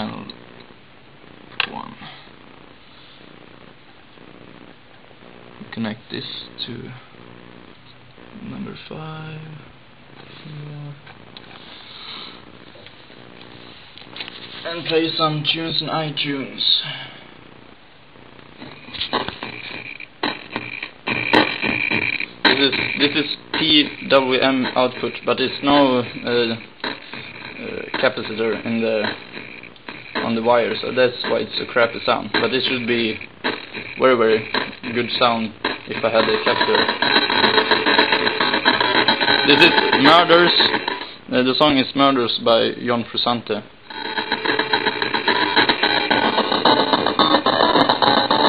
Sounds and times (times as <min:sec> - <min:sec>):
Speech: 0:00.0 - 0:00.4, 0:05.6 - 0:07.0, 0:08.4 - 0:09.7, 0:14.6 - 0:17.1, 0:22.5 - 0:26.7, 0:27.6 - 0:29.2, 0:30.2 - 0:33.2, 0:34.0 - 0:36.9, 0:39.5 - 0:43.7.